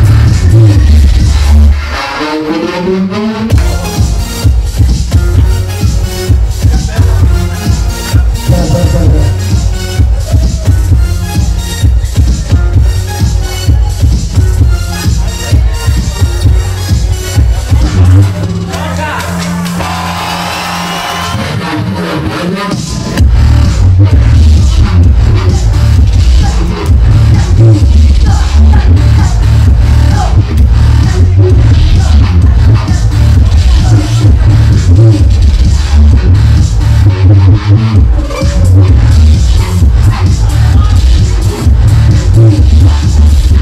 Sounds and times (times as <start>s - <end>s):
Music: 0.0s - 43.6s
Speech: 8.5s - 9.4s.